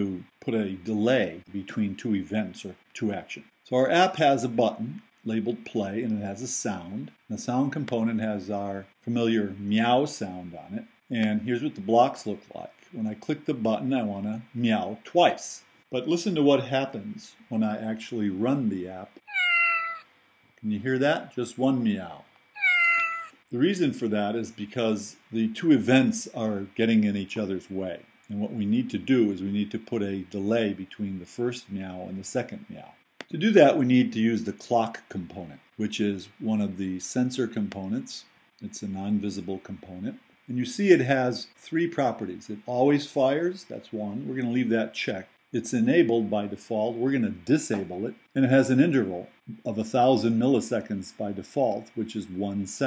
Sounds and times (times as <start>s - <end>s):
Speech: 0.0s - 19.2s, 20.6s - 22.3s, 23.6s - 52.8s.